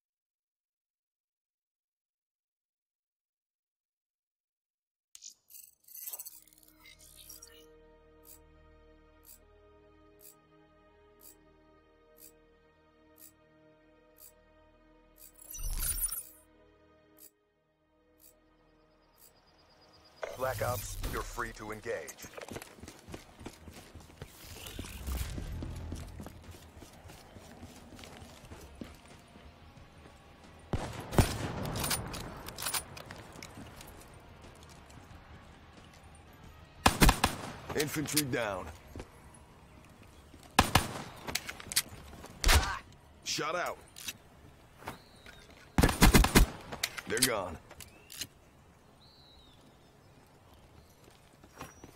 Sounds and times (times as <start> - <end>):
Music: 6.4 - 48.4.